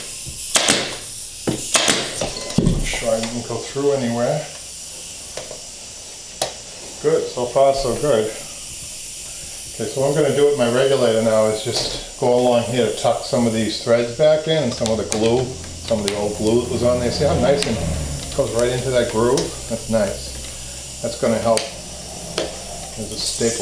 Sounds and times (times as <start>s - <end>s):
Speech: 2.8s - 4.6s, 7.0s - 8.5s, 9.8s - 20.3s, 21.0s - 21.8s, 23.0s - 23.6s.